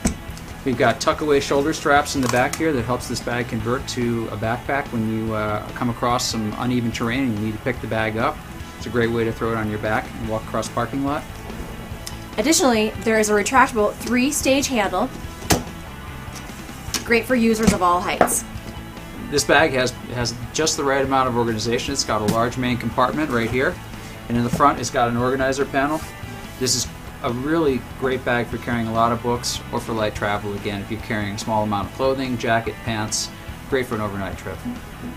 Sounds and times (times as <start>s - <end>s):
Music: 0.0s - 35.1s
Speech: 0.6s - 11.2s, 12.4s - 15.1s, 17.0s - 18.4s, 19.3s - 34.8s.